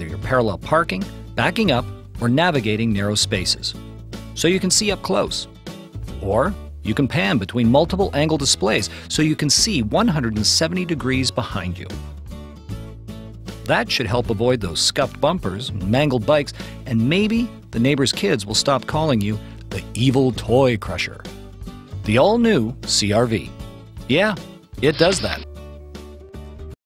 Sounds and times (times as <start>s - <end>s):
Speech: 0.0s - 3.8s, 4.4s - 5.5s, 6.2s - 12.0s, 13.7s - 21.3s, 22.0s - 23.5s, 24.1s - 25.5s
Music: 0.0s - 26.8s.